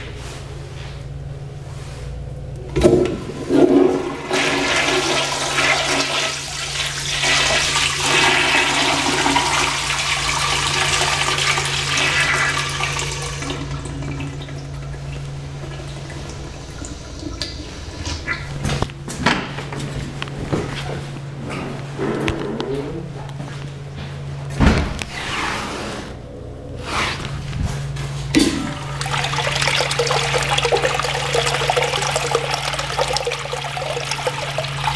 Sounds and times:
Toilet flush: 2.8s - 18.7s, 28.4s - 34.9s.

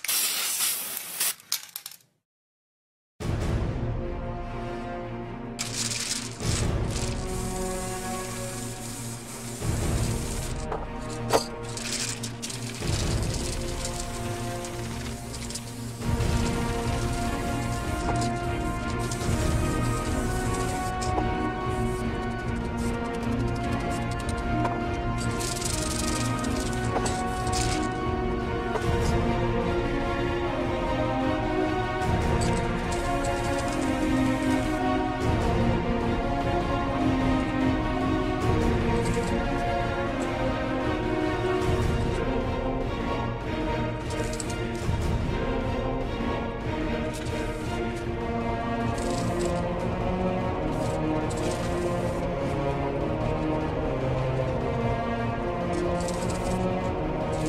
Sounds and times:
Music: 3.2s - 57.4s.

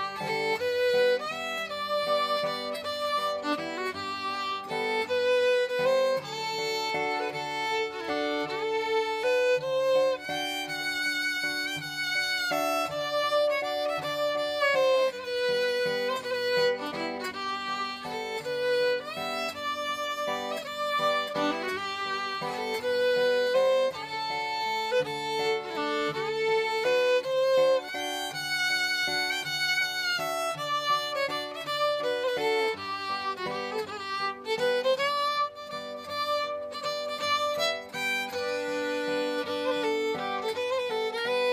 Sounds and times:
Pizzicato: 0.0s - 41.5s.

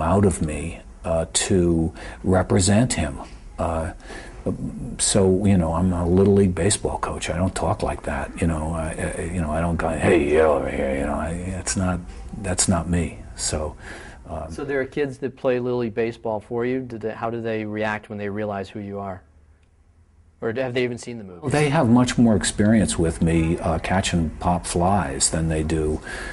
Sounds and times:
Speech: 0.0s - 19.3s, 20.4s - 26.1s.

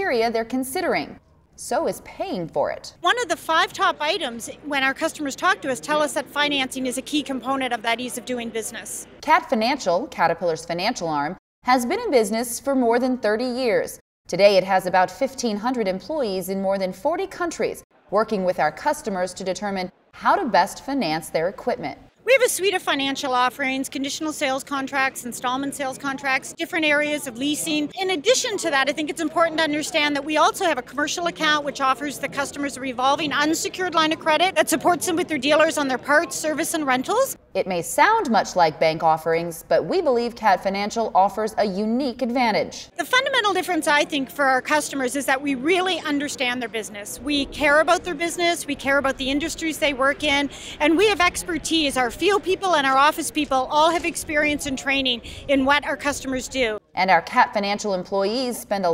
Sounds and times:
Speech: 0.0s - 58.9s.

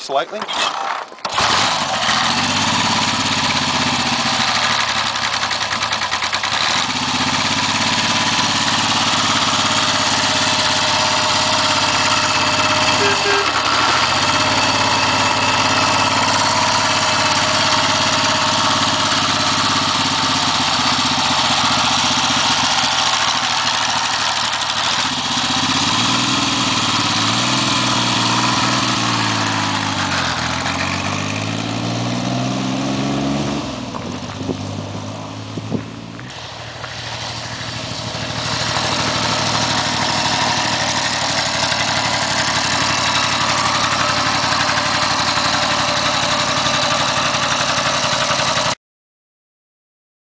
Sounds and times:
Motorcycle: 0.0s - 48.8s
Outside, rural or natural: 0.0s - 48.8s.

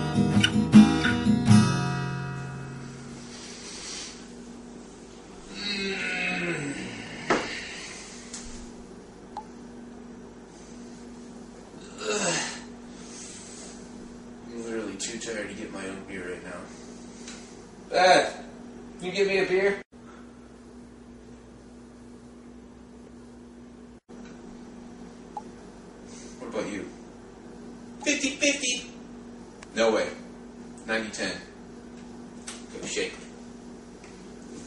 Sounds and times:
Speech: 14.5s - 16.7s, 17.9s - 19.8s, 26.4s - 27.0s, 28.0s - 29.0s, 29.7s - 31.5s, 32.7s - 33.3s.

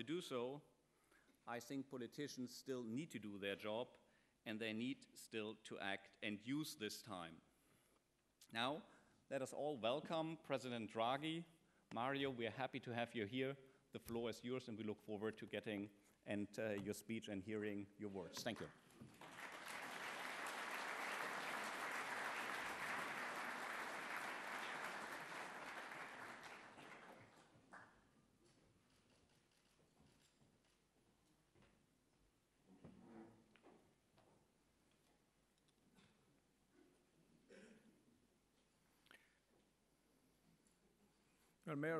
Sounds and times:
Male speech, man speaking: 0.0s - 0.7s, 1.5s - 7.4s, 8.5s - 18.8s, 41.6s - 41.9s
Narration, monologue: 0.0s - 19.0s.

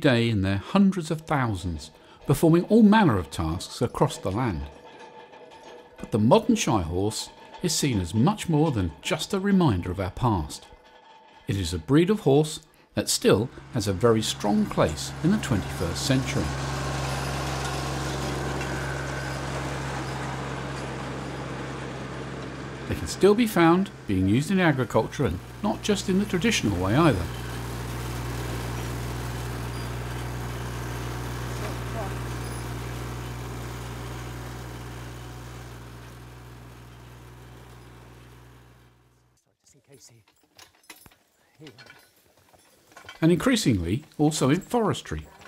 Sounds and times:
Speech: 0.0s - 4.7s, 6.1s - 10.7s, 11.5s - 16.6s, 22.9s - 27.4s, 31.6s - 32.2s, 39.5s - 40.3s, 43.2s - 45.4s.

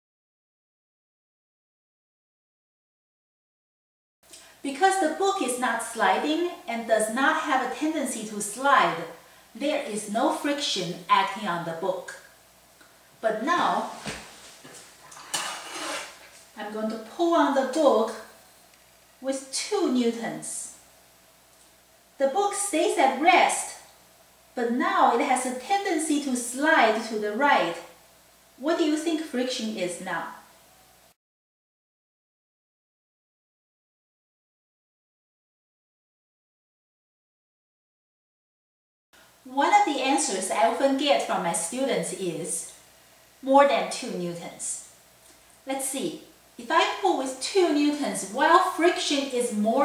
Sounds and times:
Speech: 4.7s - 12.2s, 13.2s - 14.2s, 16.6s - 18.3s, 19.2s - 20.8s, 22.2s - 23.9s, 24.6s - 27.9s, 28.6s - 30.4s, 39.5s - 42.8s, 43.4s - 44.9s, 45.7s - 49.8s.

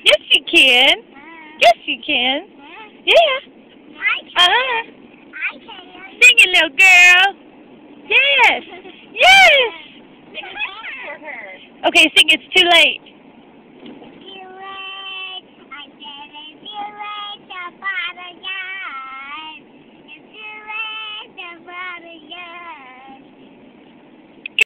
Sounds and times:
Child singing: 14.2s - 19.6s, 20.3s - 23.2s.

